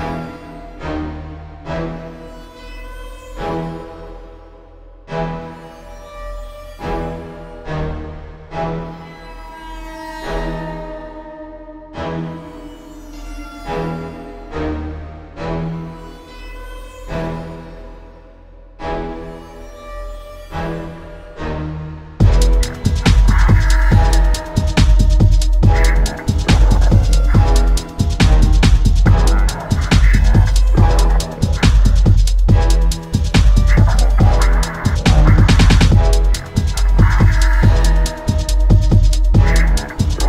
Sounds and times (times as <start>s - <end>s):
Drum and bass: 22.2s - 40.2s
Dubstep: 22.2s - 40.2s.